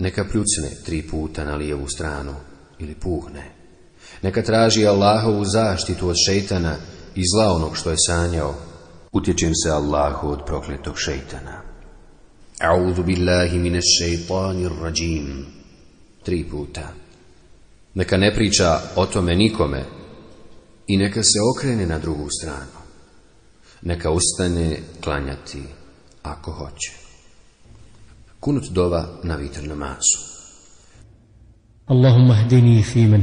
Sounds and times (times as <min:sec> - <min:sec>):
Speech: 0:00.0 - 0:11.8, 0:12.5 - 0:15.6, 0:16.2 - 0:17.1, 0:17.9 - 0:20.2, 0:20.9 - 0:23.0, 0:23.8 - 0:27.2, 0:28.4 - 0:30.6, 0:31.8 - 0:33.2.